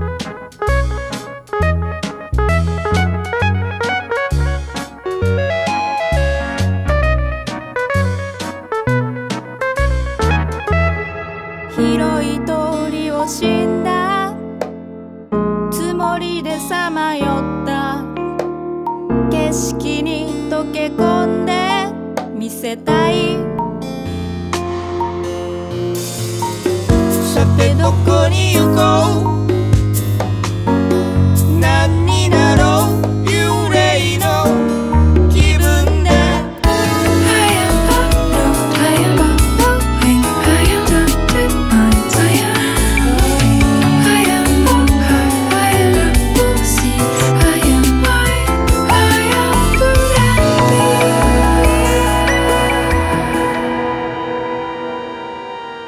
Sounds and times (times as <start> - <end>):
Music: 0.0 - 55.8.